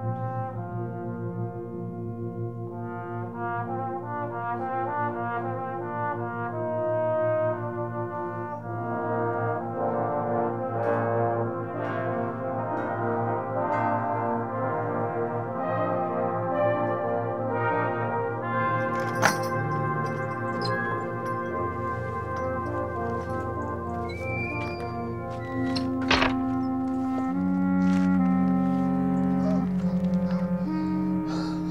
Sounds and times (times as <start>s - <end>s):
Trumpet: 0.0s - 31.7s
Thunk: 26.0s - 26.5s.